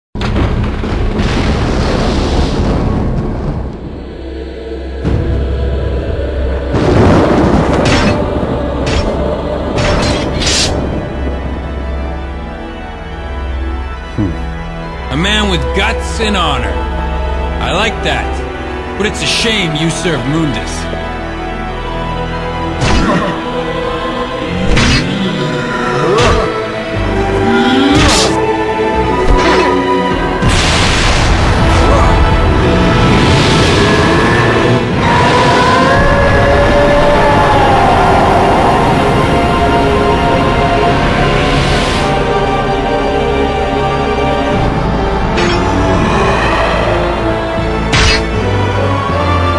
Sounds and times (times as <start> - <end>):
Eruption: 0.2 - 4.2, 5.8 - 12.4, 30.4 - 42.8
Music: 0.2 - 49.5.